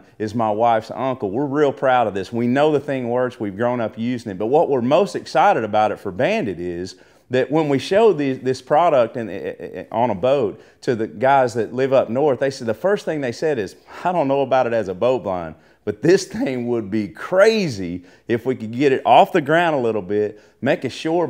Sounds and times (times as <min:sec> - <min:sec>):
Speech: 0:00.0 - 0:21.2.